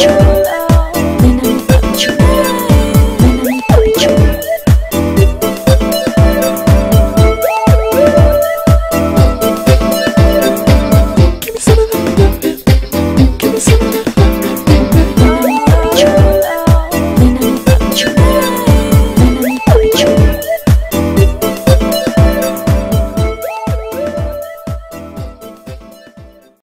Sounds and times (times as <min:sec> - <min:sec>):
Exciting music: 0:00.0 - 0:26.4.